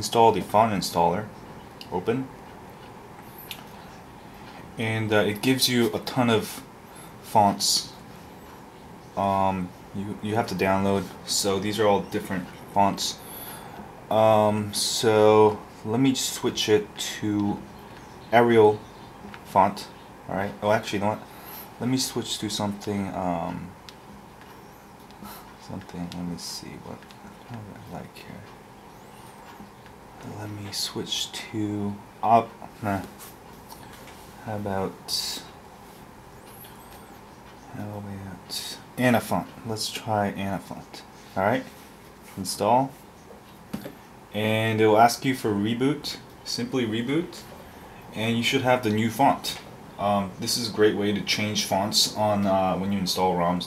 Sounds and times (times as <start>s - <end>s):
Speech: 0.0s - 2.4s, 4.8s - 8.0s, 9.2s - 13.2s, 14.1s - 17.7s, 18.3s - 18.9s, 19.5s - 23.8s, 25.6s - 28.6s, 30.2s - 33.2s, 34.4s - 35.6s, 37.7s - 41.8s, 42.4s - 43.0s, 44.3s - 47.5s, 48.1s - 53.6s.